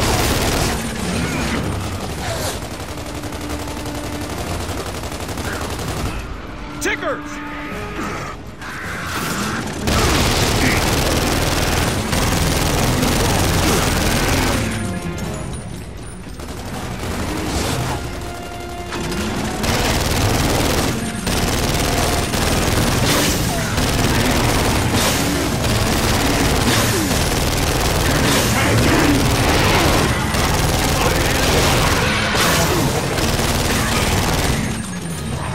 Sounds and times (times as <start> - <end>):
Music: 0.0 - 35.5
Speech: 6.8 - 7.4, 30.9 - 31.8.